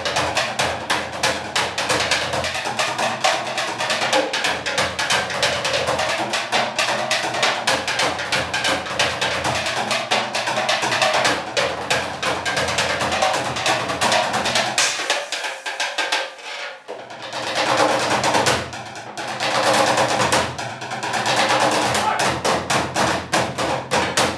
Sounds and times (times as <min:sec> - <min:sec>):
Music: 0:00.0 - 0:24.3.